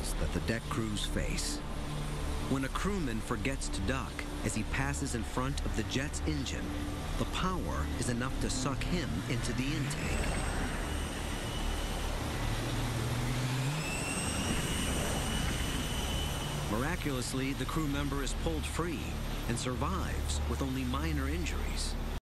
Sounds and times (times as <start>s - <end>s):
Speech: 0.0s - 1.6s, 2.5s - 10.3s, 16.7s - 22.0s
Jet engine: 0.0s - 22.2s.